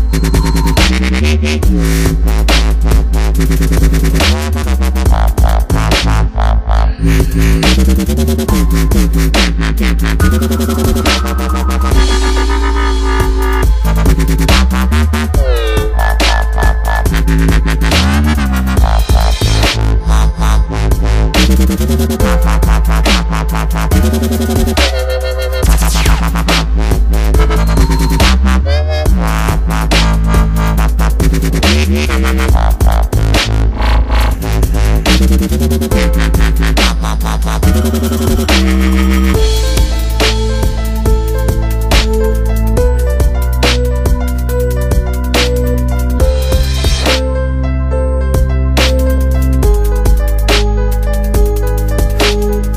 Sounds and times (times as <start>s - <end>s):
Dubstep: 0.0s - 47.4s, 48.4s - 52.7s.